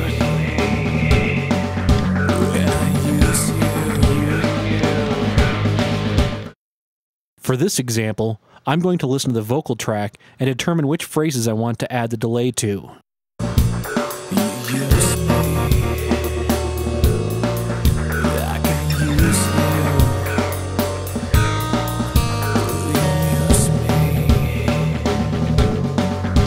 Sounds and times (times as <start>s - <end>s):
Music: 0.0s - 6.6s, 13.4s - 26.4s
Speech: 2.4s - 4.7s, 7.4s - 13.0s, 14.3s - 16.1s, 18.2s - 20.4s, 22.7s - 24.7s.